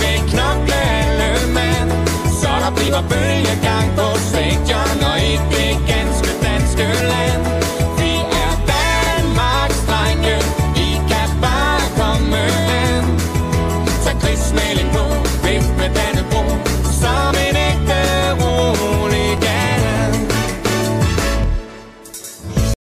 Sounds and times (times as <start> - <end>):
Music: 0.0 - 22.8.